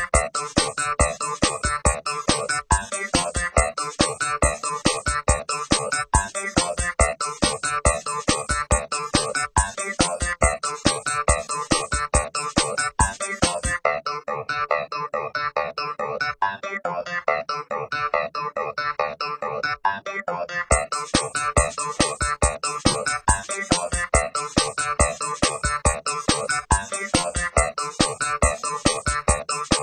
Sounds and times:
Music: 0:00.0 - 0:29.8.

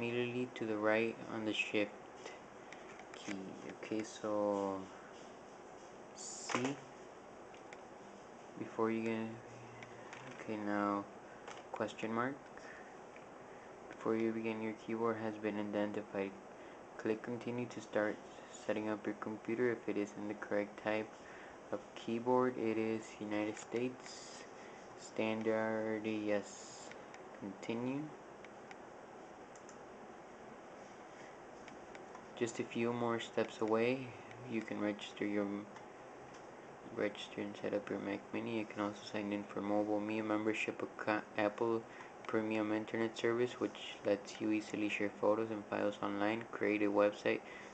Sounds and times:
Speech: 0:00.0 - 0:02.4, 0:03.2 - 0:05.0, 0:06.2 - 0:06.9, 0:08.6 - 0:11.1, 0:11.7 - 0:12.5, 0:13.9 - 0:16.4, 0:17.0 - 0:28.2, 0:32.4 - 0:35.7, 0:36.9 - 0:47.5
Inside, small room: 0:00.0 - 0:47.7.

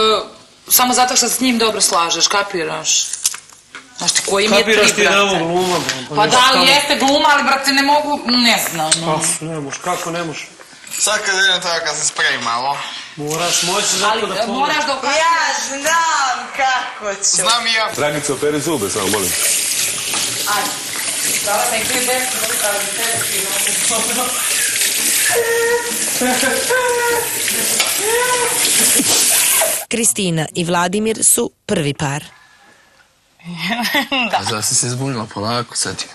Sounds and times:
Water: 0:18.0 - 0:29.9.

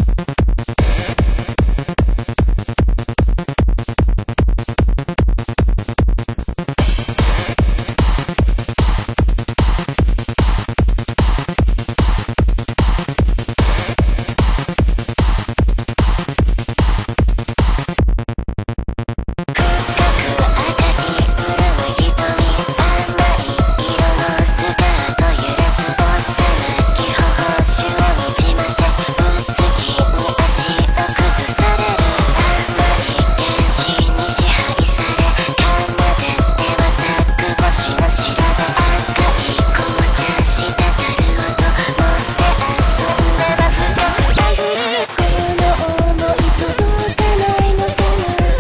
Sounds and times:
Music: 0:00.0 - 0:48.6.

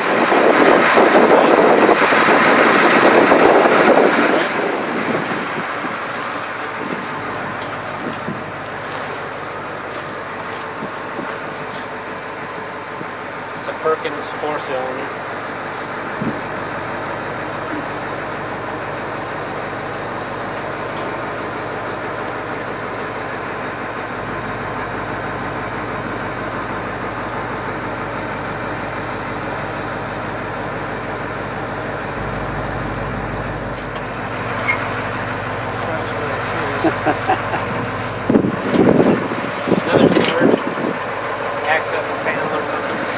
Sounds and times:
Truck: 0:00.0 - 0:43.1
Speech: 0:13.6 - 0:15.2, 0:35.8 - 0:37.0, 0:39.8 - 0:40.6, 0:41.6 - 0:43.1.

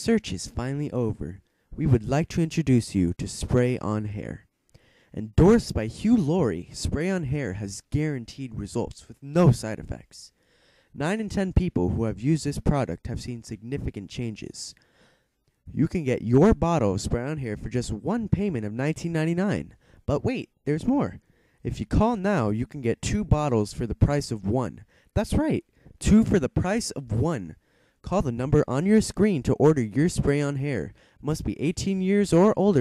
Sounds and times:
Speech: 0:00.0 - 0:04.5, 0:05.1 - 0:10.4, 0:11.0 - 0:14.8, 0:15.7 - 0:32.8.

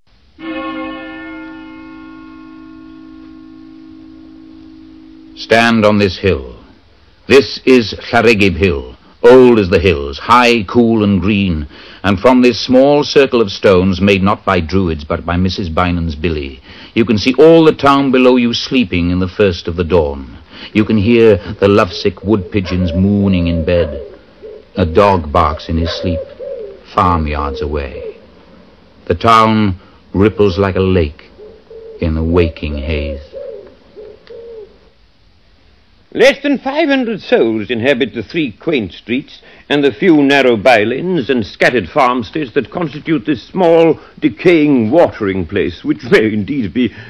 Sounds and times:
Speech: 0:05.4 - 0:06.7, 0:07.3 - 0:24.0, 0:24.8 - 0:26.3, 0:26.9 - 0:28.2, 0:29.1 - 0:31.3, 0:32.0 - 0:33.3, 0:36.1 - 0:47.0.

